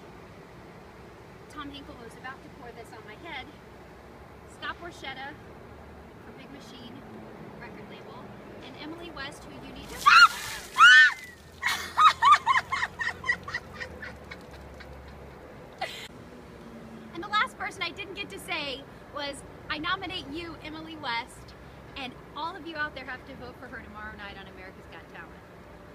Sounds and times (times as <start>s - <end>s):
Speech: 1.5s - 3.6s, 4.5s - 5.4s, 6.2s - 7.0s, 7.6s - 10.1s, 17.2s - 25.4s.